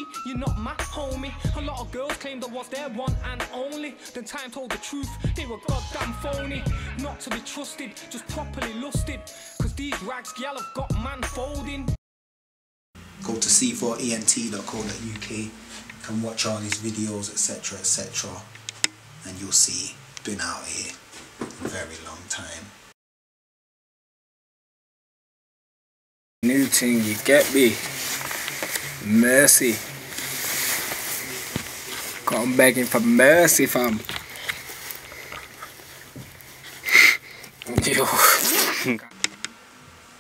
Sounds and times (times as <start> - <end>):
Speech: 13.2 - 18.5, 19.2 - 21.0, 21.6 - 22.8, 26.4 - 27.9, 29.0 - 29.8, 31.3 - 34.1, 37.7 - 39.2.